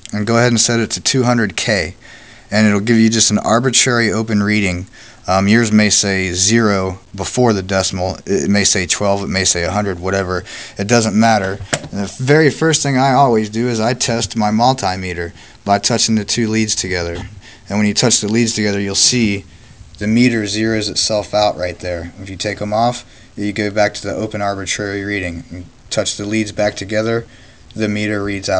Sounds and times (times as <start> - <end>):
Speech: 0.0 - 28.5.